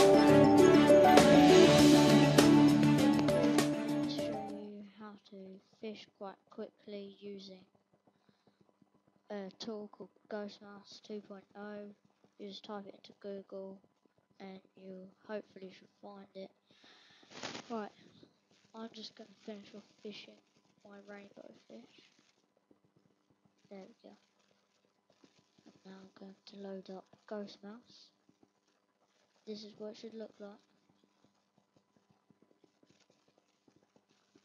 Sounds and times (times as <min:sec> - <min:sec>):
Speech: 0:04.1 - 0:07.7, 0:09.3 - 0:13.8, 0:14.4 - 0:16.6, 0:17.7 - 0:18.2, 0:18.8 - 0:22.1, 0:23.7 - 0:24.2, 0:25.8 - 0:28.1, 0:29.5 - 0:30.6.